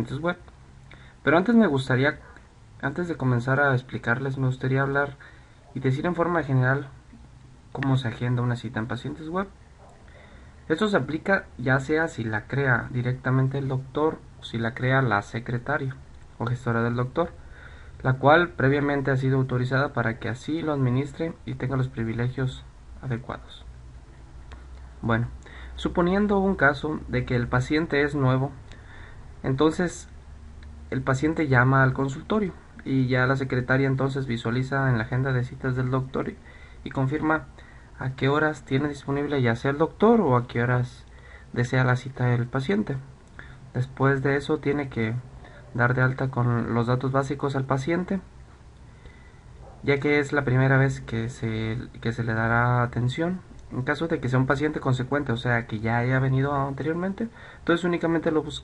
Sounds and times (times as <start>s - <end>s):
Speech: 0.0s - 0.5s, 1.2s - 7.0s, 7.7s - 9.6s, 10.7s - 17.4s, 18.0s - 23.7s, 25.0s - 28.6s, 29.4s - 30.2s, 30.9s - 43.1s, 43.7s - 48.3s, 49.8s - 58.6s.